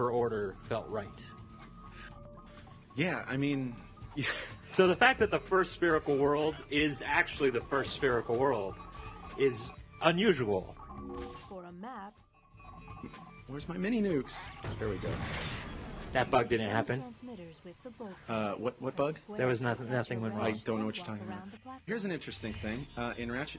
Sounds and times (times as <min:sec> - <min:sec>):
Speech: 0:16.2 - 0:23.5.